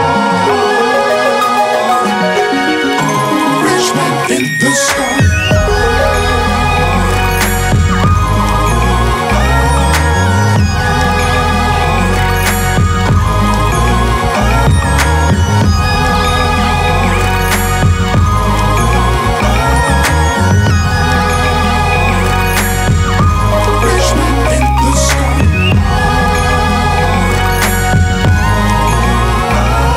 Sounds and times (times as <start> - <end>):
Music: 0.0 - 29.9.